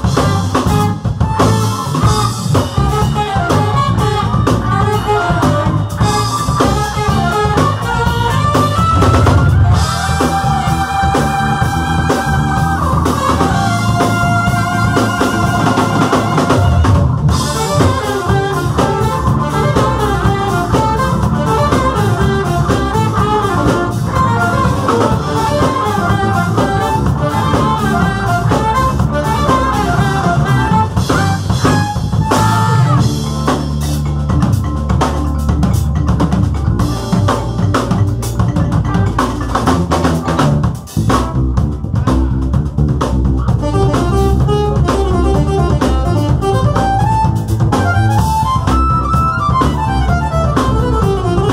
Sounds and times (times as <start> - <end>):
Funk: 0.0 - 51.5.